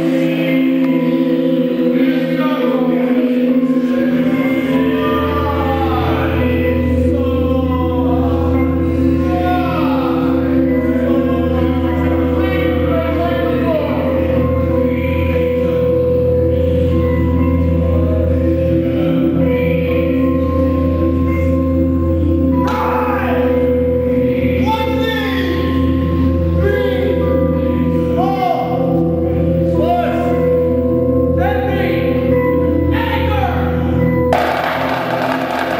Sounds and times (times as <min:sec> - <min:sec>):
Music: 0:00.0 - 0:35.7.